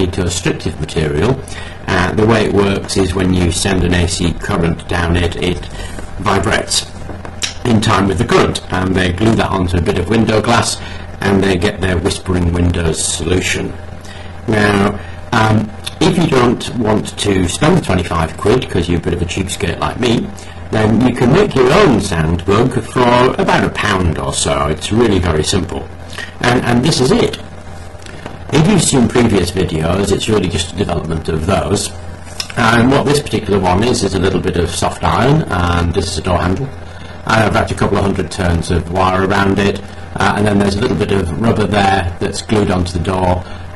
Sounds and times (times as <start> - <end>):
Speech: 0.0 - 13.8, 14.5 - 27.5, 28.1 - 43.6.